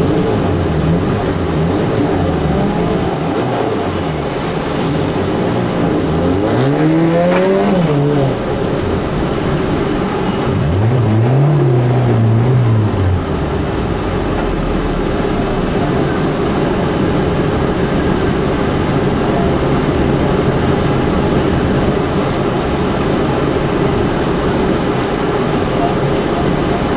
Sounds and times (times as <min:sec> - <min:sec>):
Music: 0:00.0 - 0:26.9
Vehicle: 0:00.0 - 0:26.9.